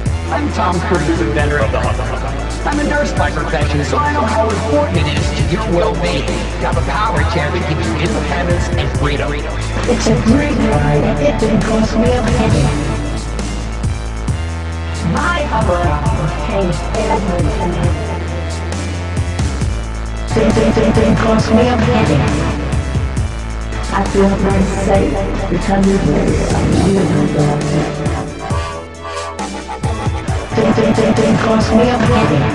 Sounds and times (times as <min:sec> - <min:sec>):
Dubstep: 0:00.0 - 0:32.5
Speech: 0:00.2 - 0:13.0, 0:15.0 - 0:18.4, 0:20.3 - 0:22.6, 0:23.8 - 0:32.5.